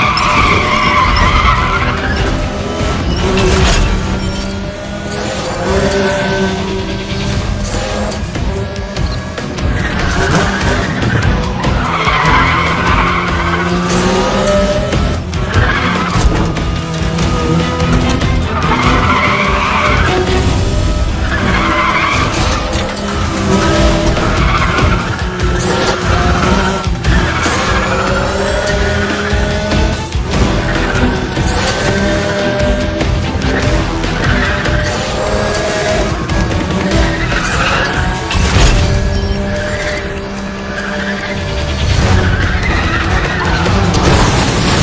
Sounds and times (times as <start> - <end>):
Music: 0.0 - 44.8.